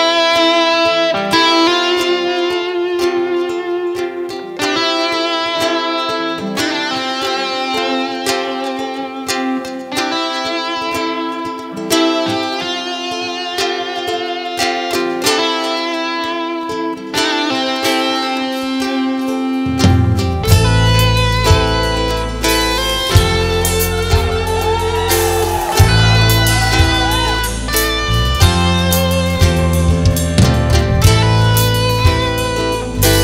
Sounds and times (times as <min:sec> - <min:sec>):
Guitar: 0:00.0 - 0:33.2.